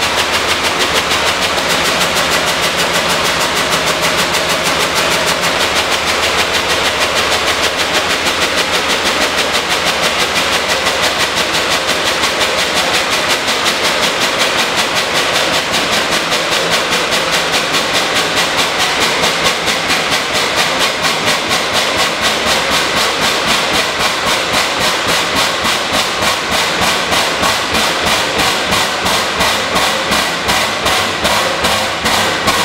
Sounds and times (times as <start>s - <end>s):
Heavy engine (low frequency): 0.0s - 32.6s.